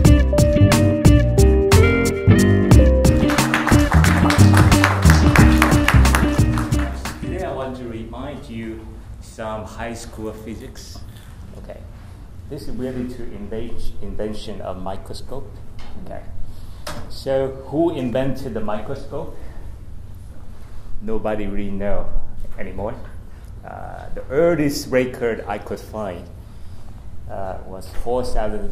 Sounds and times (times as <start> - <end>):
Speech: 7.2 - 11.9, 12.5 - 16.4, 17.1 - 19.4, 21.0 - 26.3, 27.3 - 28.7.